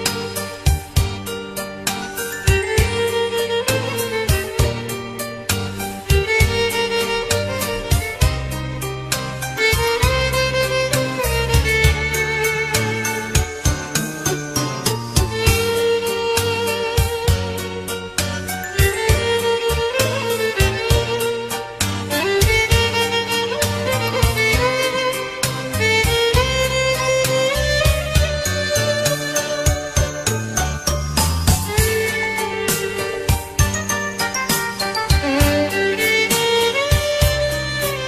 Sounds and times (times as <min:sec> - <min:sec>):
Violin, fiddle: 0:00.0 - 0:38.0.